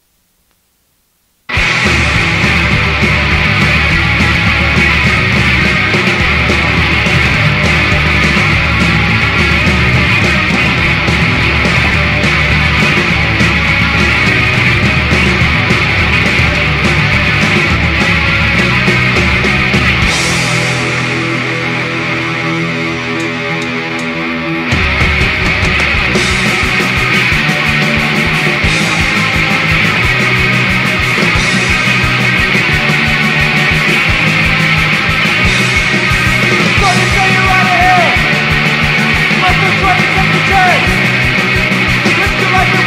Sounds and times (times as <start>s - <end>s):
Heavy metal: 1.5s - 42.8s
Punk rock: 1.5s - 42.8s
Yell: 36.7s - 38.5s, 39.3s - 41.1s.